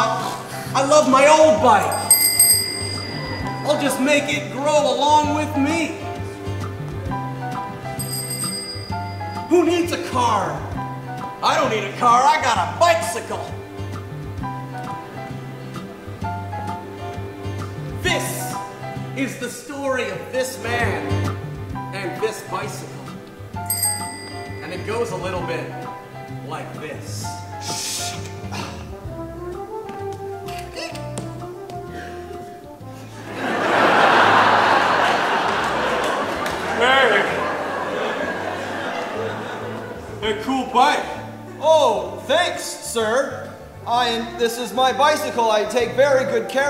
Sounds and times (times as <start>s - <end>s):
Speech: 0.0s - 1.9s, 9.5s - 10.7s, 11.4s - 13.5s, 19.2s - 21.1s, 21.9s - 23.0s, 24.6s - 25.7s, 40.2s - 46.7s
Music: 0.0s - 46.7s.